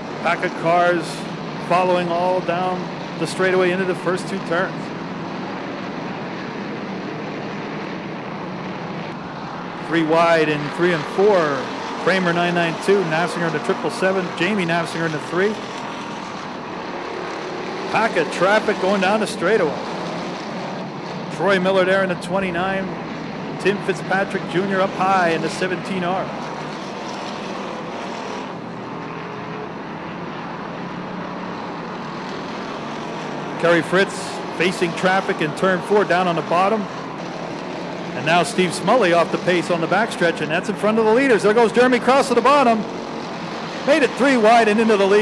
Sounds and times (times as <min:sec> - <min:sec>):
Race car, auto racing: 0:00.0 - 0:45.2.